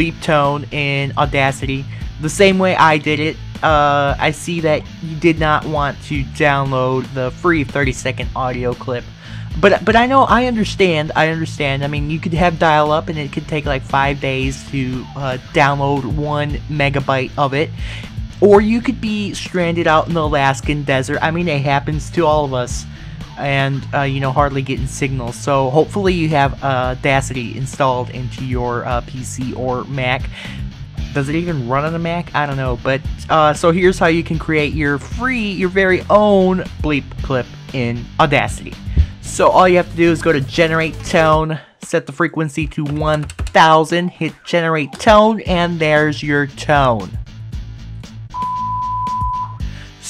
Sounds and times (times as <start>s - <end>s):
Speech: 0.0s - 17.8s, 18.4s - 47.2s
Music: 0.0s - 50.0s.